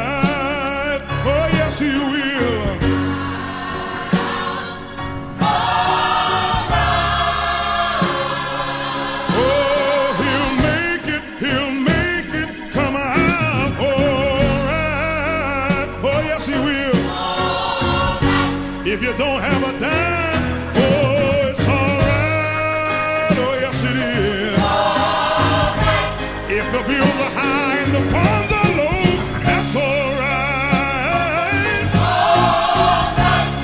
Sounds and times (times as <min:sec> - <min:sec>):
Gospel music: 0:00.0 - 0:33.6
Soul music: 0:00.0 - 0:33.6.